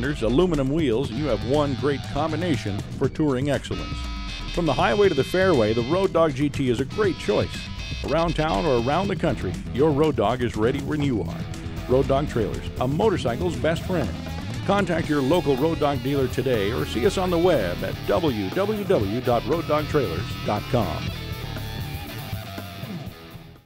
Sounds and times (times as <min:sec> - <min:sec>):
Speech: 0:00.0 - 0:04.0, 0:04.6 - 0:21.1
Music: 0:00.0 - 0:23.6.